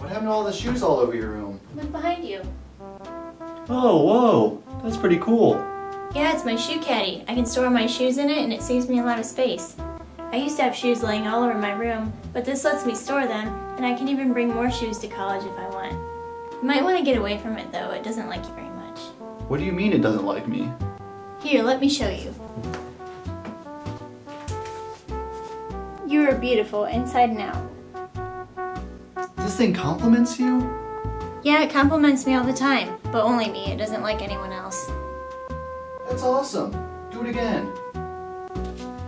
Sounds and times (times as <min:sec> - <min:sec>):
Speech: 0:00.0 - 0:02.5, 0:03.7 - 0:05.6, 0:06.2 - 0:09.7, 0:10.3 - 0:16.0, 0:16.6 - 0:20.7, 0:26.0 - 0:27.6, 0:29.4 - 0:30.7, 0:31.4 - 0:34.9
Music: 0:00.0 - 0:39.0.